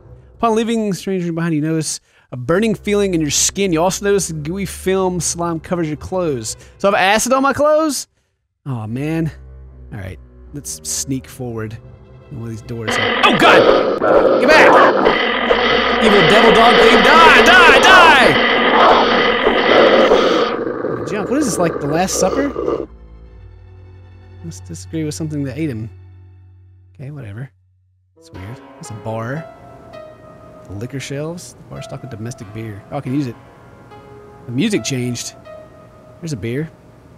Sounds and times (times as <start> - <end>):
Music: 0.0 - 14.0, 21.1 - 37.1
Speech: 0.4 - 8.1, 8.7 - 13.7, 14.4 - 14.9, 16.0 - 18.4, 21.1 - 22.6, 24.4 - 25.9, 27.0 - 27.5, 28.2 - 29.5, 30.7 - 33.4, 34.5 - 35.4, 36.2 - 36.8.